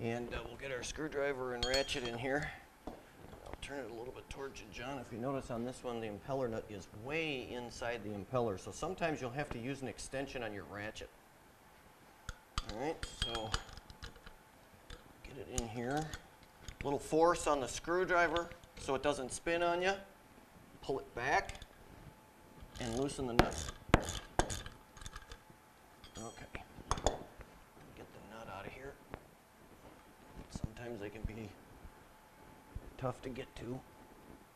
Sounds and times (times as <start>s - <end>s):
Speech: 0.0s - 2.6s, 3.4s - 11.1s, 12.7s - 13.6s, 15.2s - 16.2s, 16.8s - 20.1s, 20.8s - 21.6s, 22.8s - 23.6s, 26.2s - 26.7s, 28.0s - 29.0s, 30.5s - 31.6s, 33.0s - 33.9s.